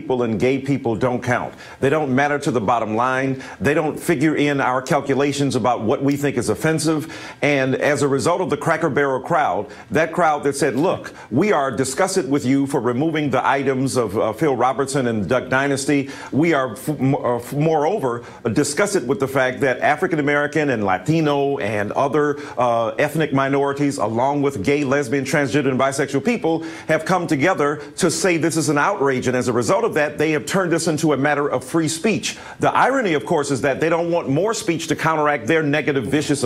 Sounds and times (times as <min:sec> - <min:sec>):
Speech: 0:00.0 - 0:36.4.